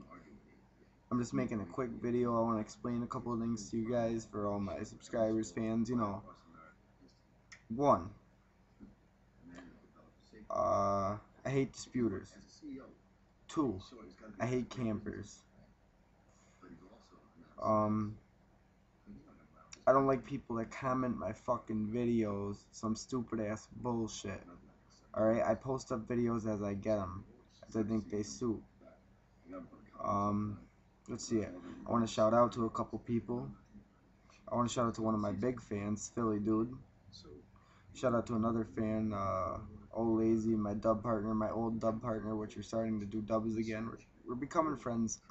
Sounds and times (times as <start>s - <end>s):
Speech: 0.0s - 8.2s, 9.5s - 15.5s, 16.6s - 18.2s, 19.1s - 45.3s.